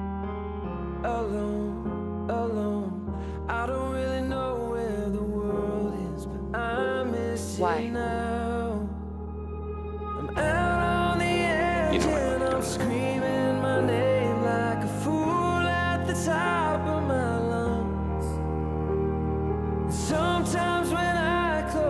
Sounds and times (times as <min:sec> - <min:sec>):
Music: 0:00.0 - 0:21.9
Speech: 0:03.6 - 0:08.9, 0:10.3 - 0:17.9.